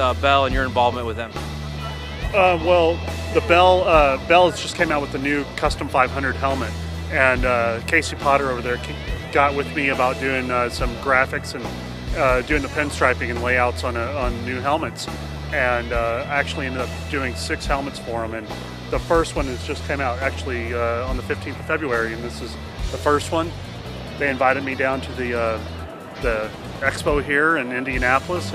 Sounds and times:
Speech: 0.0 - 1.4, 2.4 - 23.5, 24.2 - 25.6, 26.2 - 28.5
Music: 0.0 - 28.5.

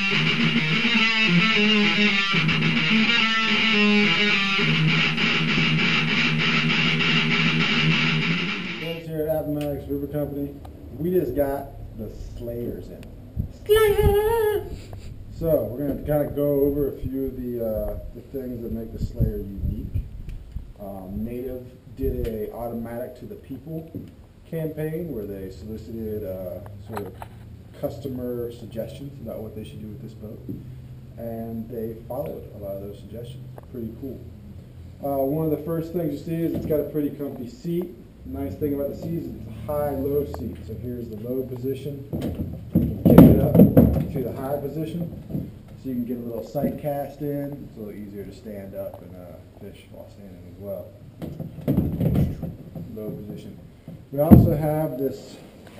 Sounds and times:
Speech: 8.8 - 20.1, 20.8 - 27.2, 27.8 - 30.6, 31.2 - 34.4, 35.0 - 42.1, 42.8 - 45.2, 45.8 - 51.0, 52.2 - 55.5.

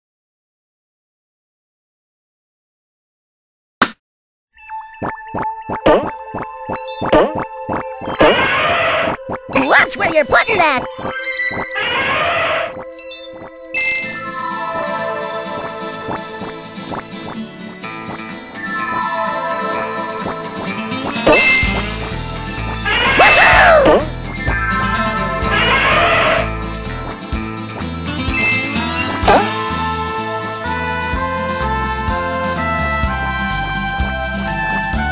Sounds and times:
Music: 4.6 - 35.1
Speech: 9.6 - 10.9.

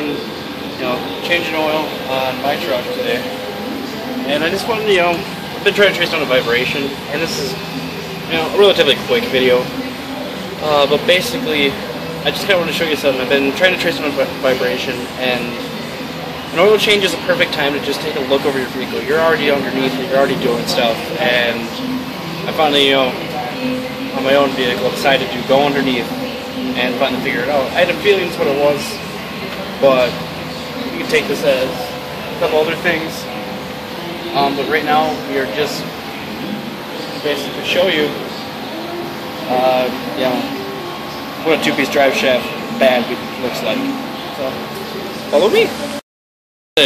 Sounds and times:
Speech: 0.0 - 30.2, 30.8 - 33.4, 34.0 - 46.0.

